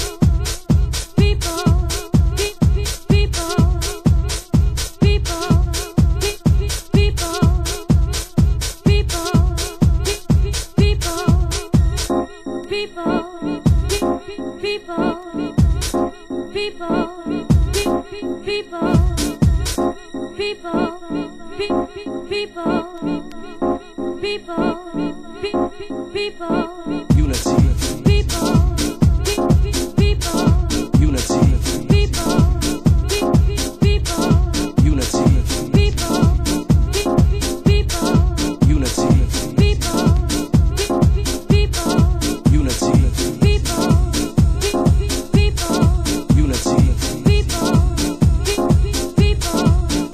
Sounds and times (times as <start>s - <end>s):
Music: 0.0s - 50.1s.